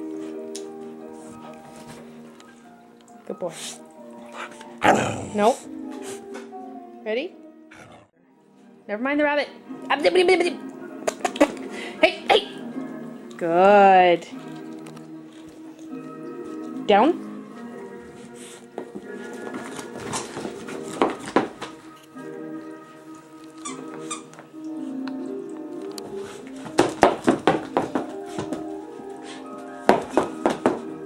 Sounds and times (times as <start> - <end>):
Music: 0.0 - 31.0.